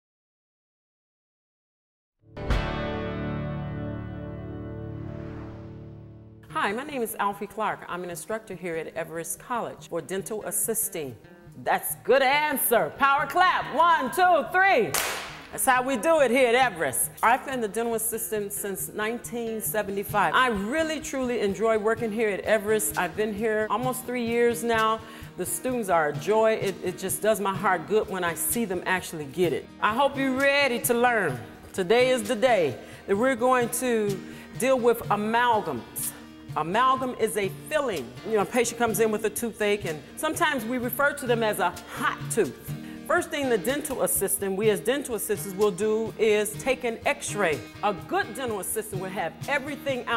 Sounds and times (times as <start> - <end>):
Music: 2.2 - 50.1
Speech: 6.5 - 14.9, 15.5 - 50.1.